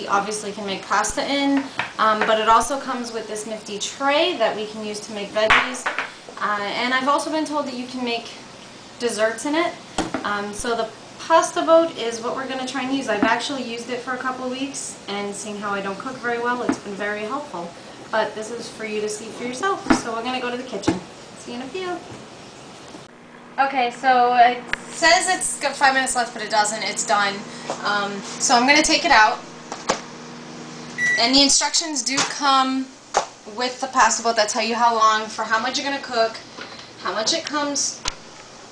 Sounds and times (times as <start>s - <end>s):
Speech: 0.0s - 5.8s, 6.4s - 8.4s, 9.0s - 22.0s, 23.6s - 29.4s, 31.2s - 32.9s, 33.5s - 36.4s, 37.0s - 38.0s.